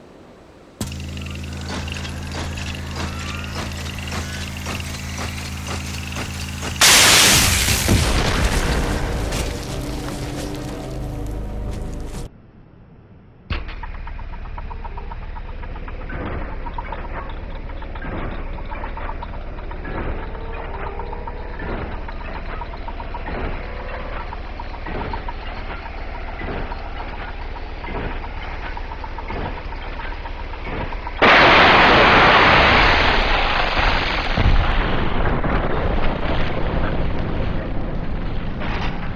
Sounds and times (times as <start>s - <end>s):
Mechanisms: 0.0s - 39.1s.